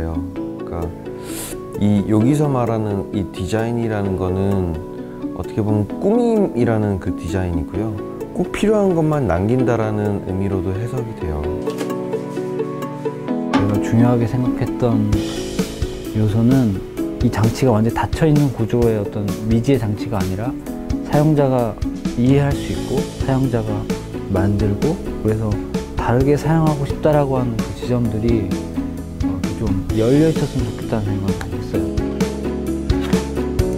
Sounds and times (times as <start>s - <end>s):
Speech: 0.0s - 0.9s, 1.8s - 4.8s, 5.4s - 11.7s, 13.6s - 15.2s, 16.1s - 28.6s, 29.5s - 32.0s
Music: 0.0s - 33.7s.